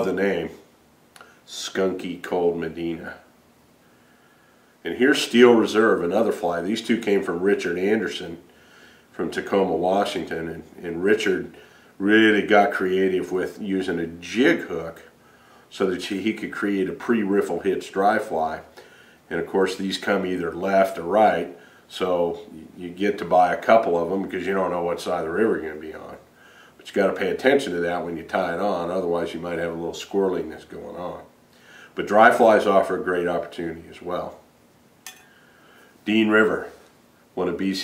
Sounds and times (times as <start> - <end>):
Speech: 0.0 - 0.7, 1.5 - 3.3, 4.8 - 8.5, 9.1 - 18.7, 19.3 - 31.3, 32.0 - 34.4, 36.0 - 36.8, 37.4 - 37.8.